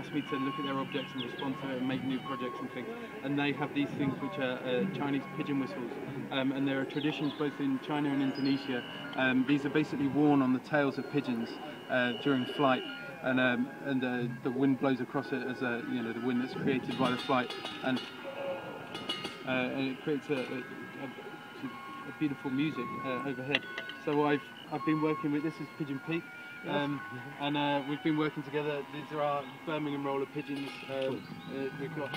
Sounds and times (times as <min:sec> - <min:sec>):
Speech: 0:00.0 - 0:18.1, 0:19.5 - 0:32.1
Music: 0:00.0 - 0:32.1.